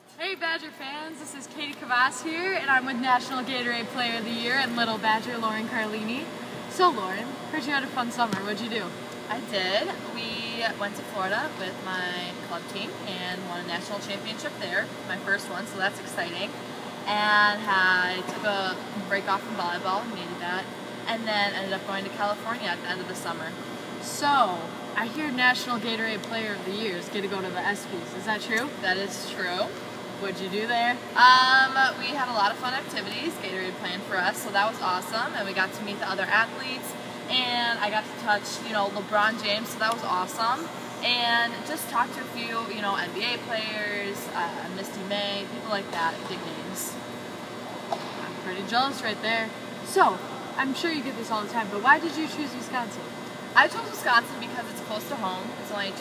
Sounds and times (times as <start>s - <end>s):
Speech: 0.1s - 16.5s, 17.1s - 47.0s, 48.4s - 53.0s, 53.6s - 56.0s.